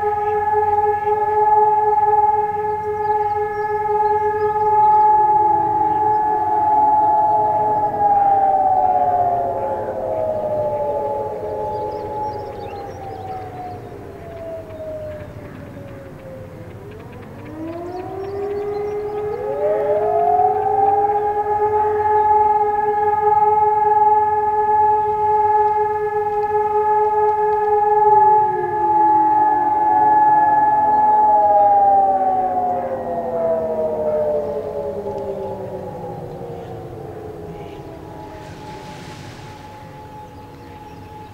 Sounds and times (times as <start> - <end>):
Siren: 0.0 - 41.3.